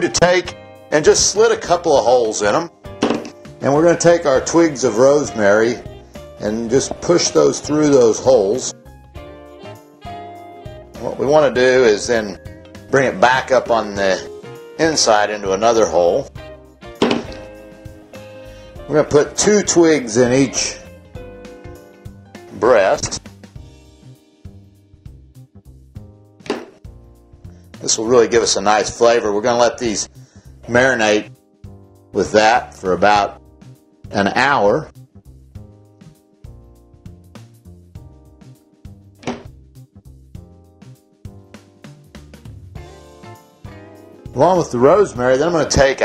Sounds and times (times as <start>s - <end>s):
Speech: 0.0s - 2.7s, 3.6s - 5.8s, 6.4s - 8.8s, 11.0s - 16.3s, 18.9s - 20.8s, 22.5s - 23.2s, 27.8s - 30.1s, 30.7s - 31.3s, 32.2s - 33.4s, 34.1s - 34.9s, 44.4s - 46.0s
Music: 0.0s - 46.0s.